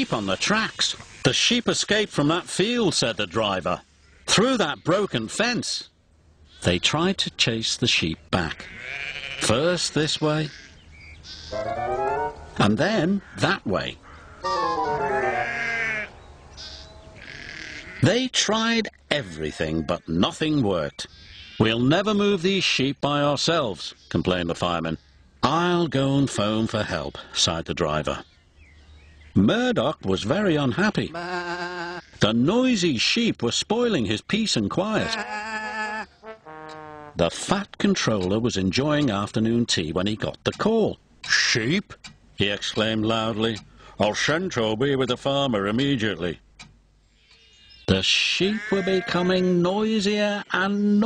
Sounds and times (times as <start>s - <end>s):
Speech: 0.0s - 5.9s, 6.6s - 8.7s, 9.4s - 10.6s, 12.6s - 14.0s, 18.0s - 28.2s, 29.4s - 31.2s, 32.2s - 35.2s, 37.2s - 46.4s, 47.9s - 51.0s
Outside, rural or natural: 0.0s - 51.0s
Music: 11.6s - 12.6s, 14.5s - 15.5s.